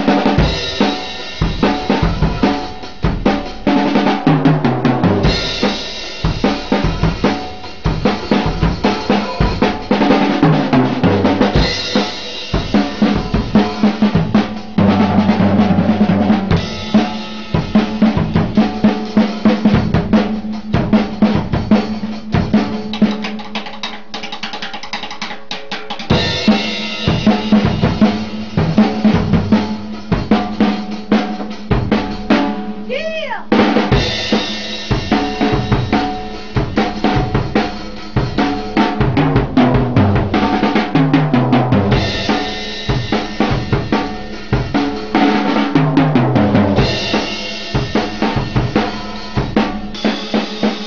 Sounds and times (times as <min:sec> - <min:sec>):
Drum kit: 0:00.0 - 0:50.8
Drum roll: 0:00.0 - 0:50.8.